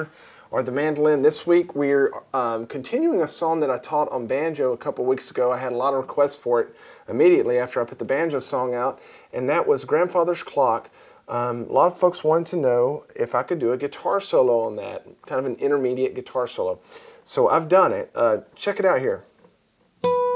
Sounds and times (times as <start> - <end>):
Speech: 0.0 - 19.3.